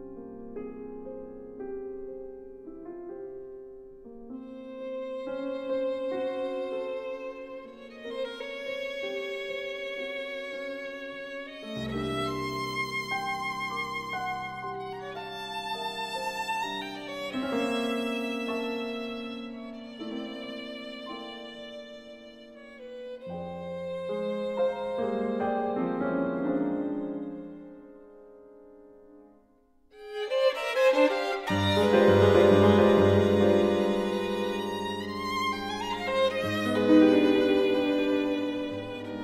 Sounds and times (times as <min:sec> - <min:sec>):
Music: 0:00.0 - 0:39.2.